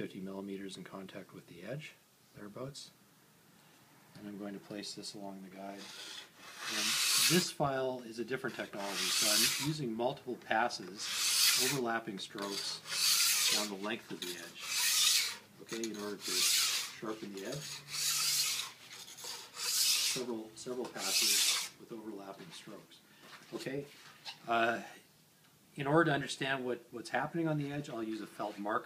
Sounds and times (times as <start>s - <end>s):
Filing (rasp): 5.8s - 7.5s, 8.8s - 9.8s, 11.0s - 11.8s, 12.4s - 13.8s, 14.4s - 20.3s, 21.0s - 21.8s
Rub: 5.8s - 7.5s, 8.8s - 9.8s, 12.4s - 20.3s, 28.2s - 28.7s.